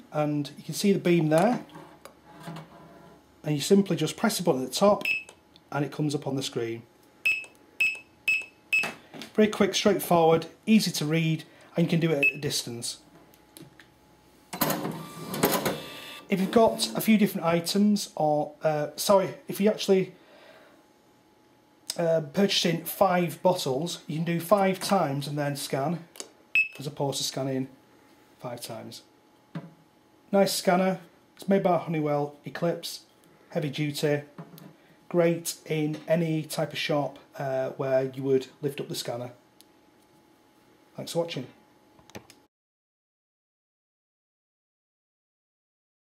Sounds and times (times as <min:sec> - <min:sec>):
Speech: 0:00.0 - 0:01.7, 0:03.4 - 0:05.1, 0:05.7 - 0:06.9, 0:09.4 - 0:13.1, 0:16.3 - 0:20.2, 0:21.9 - 0:26.1, 0:26.8 - 0:27.8, 0:28.4 - 0:29.1, 0:30.3 - 0:34.4, 0:35.1 - 0:39.4, 0:41.0 - 0:41.6
Cash register: 0:14.5 - 0:17.1.